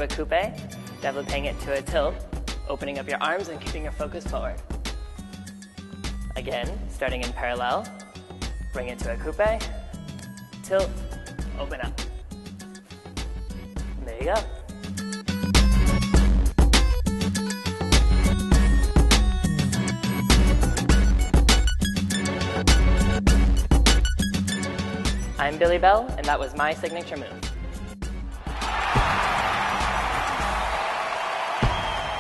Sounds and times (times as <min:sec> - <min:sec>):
Speech: 0:00.0 - 0:04.6, 0:06.4 - 0:07.9, 0:08.8 - 0:09.7, 0:11.6 - 0:12.0, 0:14.0 - 0:14.5, 0:25.4 - 0:27.4
Music: 0:00.0 - 0:32.2.